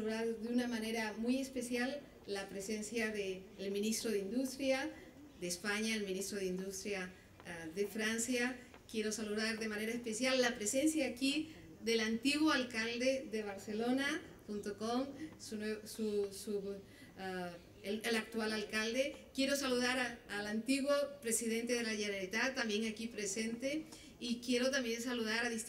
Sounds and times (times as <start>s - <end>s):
Female speech, woman speaking: 0.0s - 25.6s
Narration, monologue: 0.0s - 25.6s.